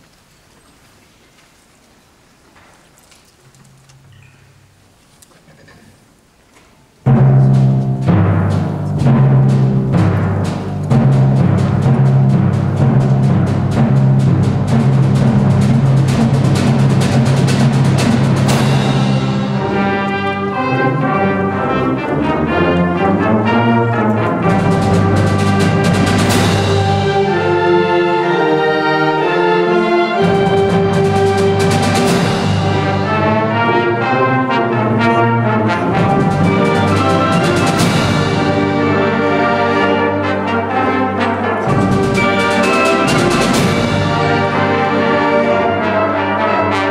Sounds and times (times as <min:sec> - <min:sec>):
Timpani: 0:07.0 - 0:46.9.